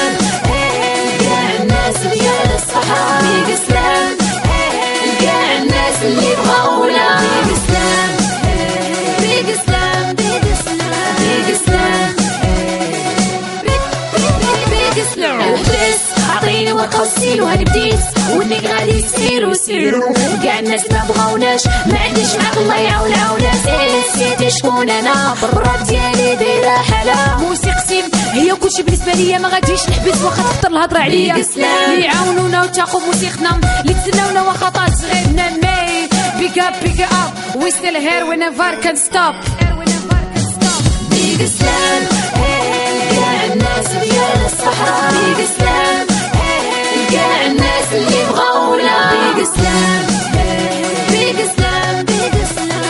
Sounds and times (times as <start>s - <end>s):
Music: 0.0s - 52.9s.